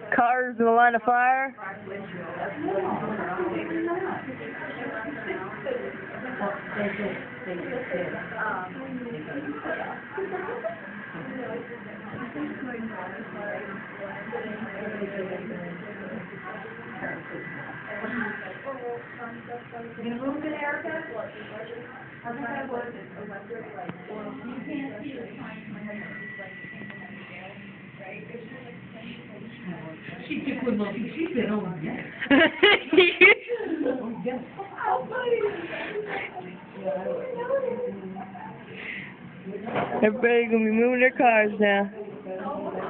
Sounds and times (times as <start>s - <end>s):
Speech: 0.0s - 32.2s.